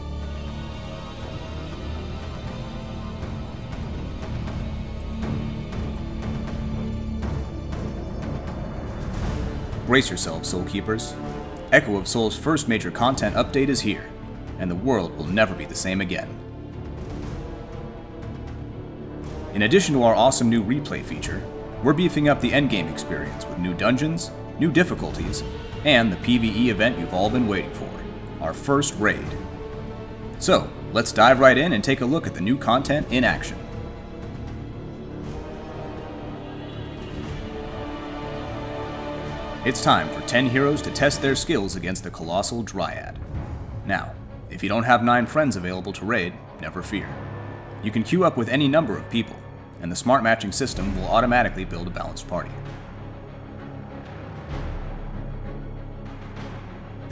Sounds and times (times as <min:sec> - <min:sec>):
Music: 0:00.0 - 0:57.1
Speech: 0:09.9 - 0:16.4, 0:19.6 - 0:29.4, 0:30.4 - 0:33.6, 0:39.7 - 0:43.2, 0:43.9 - 0:47.2, 0:47.8 - 0:52.6.